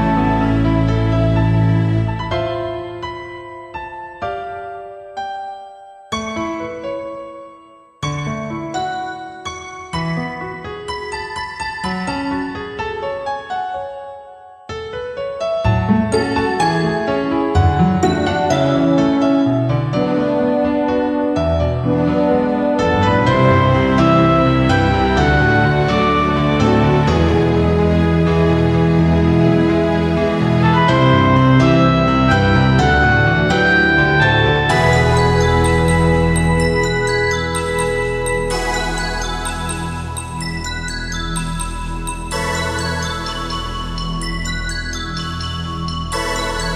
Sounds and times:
Background music: 0.0 - 46.7.

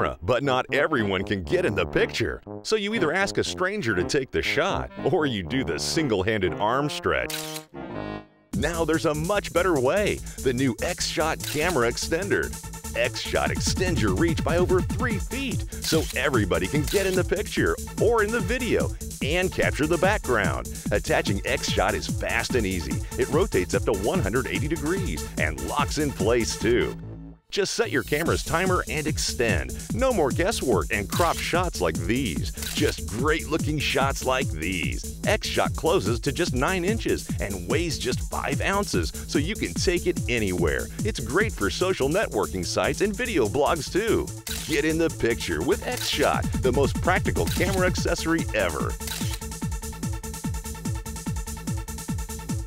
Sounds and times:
Speech: 0.0 - 7.3, 8.6 - 49.0
Music: 0.0 - 52.6.

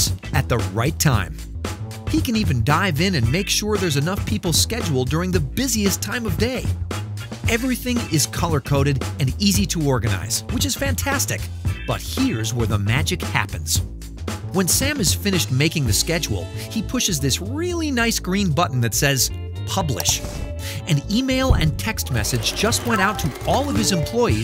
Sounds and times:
Speech: 0.0 - 1.4, 2.1 - 6.7, 7.5 - 13.8, 14.5 - 24.4
Music: 0.0 - 24.4.

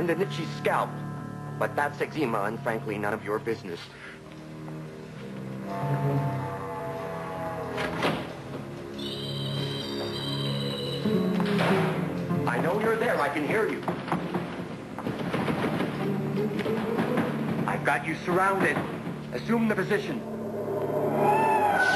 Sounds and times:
Speech: 12.5 - 13.8, 17.7 - 18.8, 19.4 - 20.2.

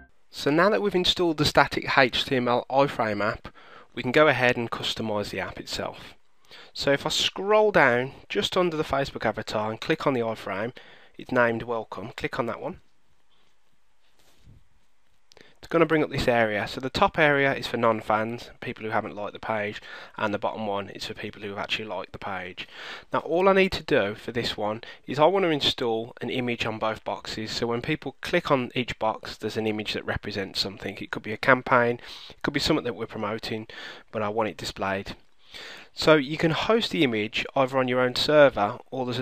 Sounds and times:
Speech: 0.4 - 6.2, 6.8 - 12.8, 15.6 - 35.2, 36.0 - 39.2.

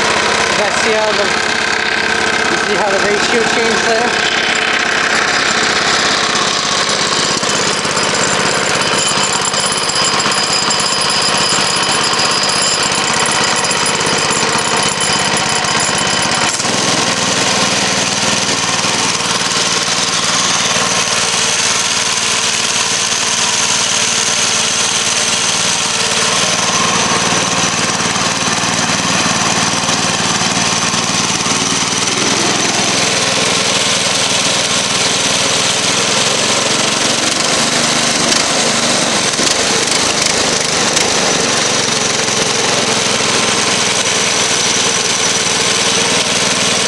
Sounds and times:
Idling: 0.0 - 46.8
Medium engine (mid frequency): 0.0 - 46.8.

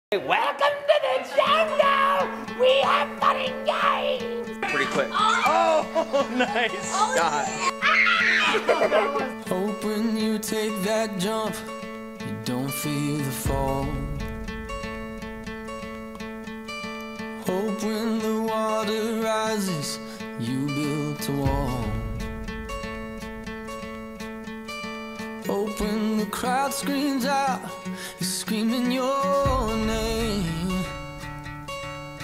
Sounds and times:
Child speech, kid speaking: 1.1 - 5.8, 6.6 - 9.3.

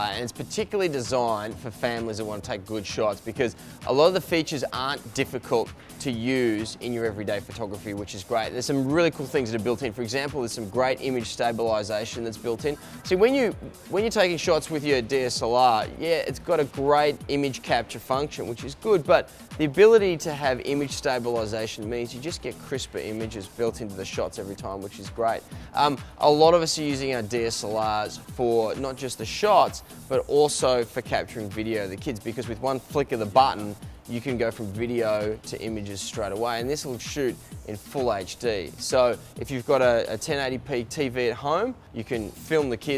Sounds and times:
Music: 0.0 - 42.9
Speech: 0.0 - 42.9.

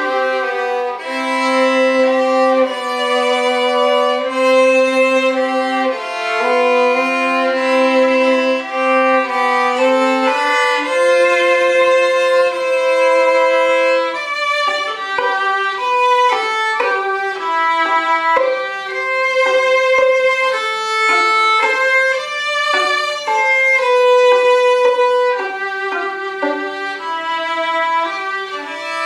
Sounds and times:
Violin, fiddle: 0.0 - 29.0.

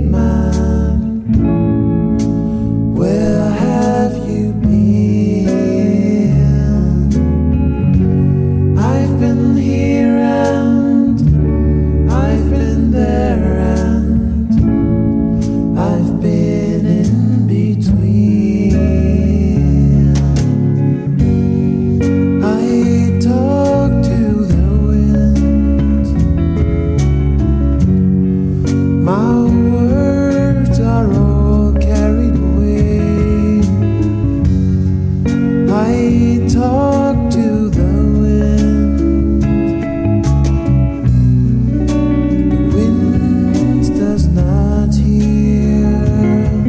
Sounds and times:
Music: 0.0 - 46.6.

